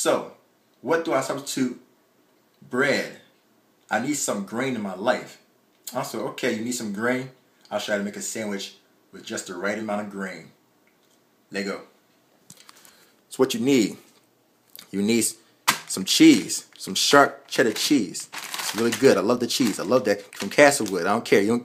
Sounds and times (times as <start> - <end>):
Speech: 0.0 - 1.9, 2.6 - 10.6, 11.5 - 11.9, 13.3 - 14.1, 14.8 - 21.6.